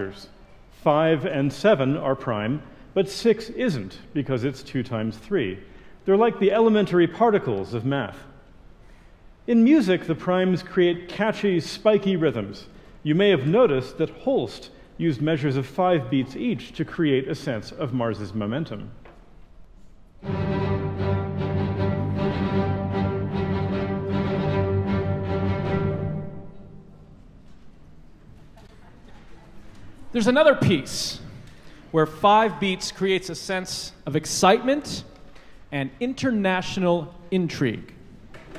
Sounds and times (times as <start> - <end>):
Speech: 0.0 - 8.4, 9.5 - 19.0, 28.7 - 31.3, 31.9 - 35.1, 35.7 - 38.0.